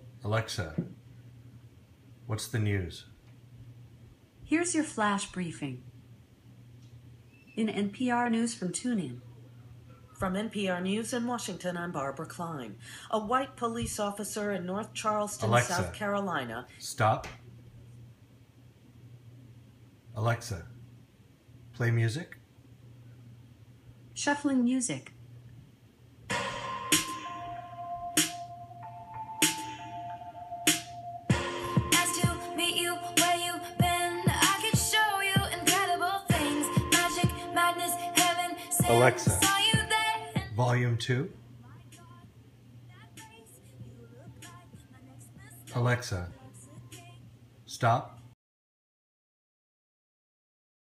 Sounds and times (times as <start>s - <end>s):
Speech: 0.2s - 0.9s, 2.3s - 3.1s, 4.5s - 5.8s, 7.6s - 9.2s, 10.2s - 17.3s, 20.2s - 20.7s, 24.2s - 25.1s, 38.8s - 39.5s, 40.5s - 41.3s, 47.7s - 48.2s.